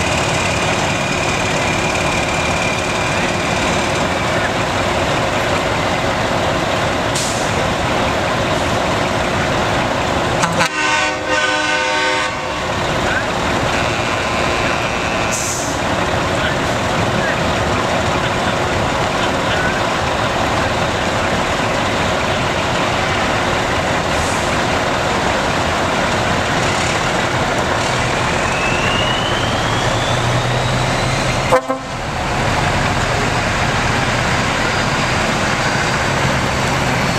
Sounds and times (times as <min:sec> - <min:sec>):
Truck: 0:00.0 - 0:37.1.